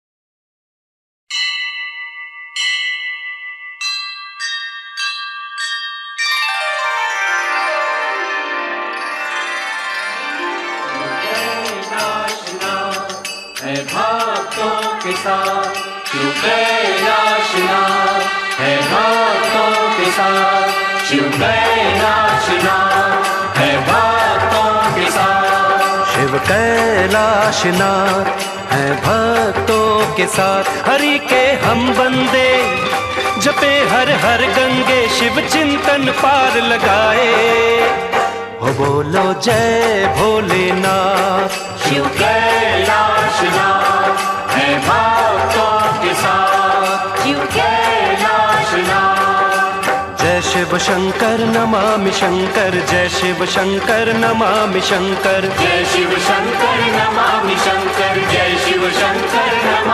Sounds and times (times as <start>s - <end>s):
Music: 4.4s - 59.9s.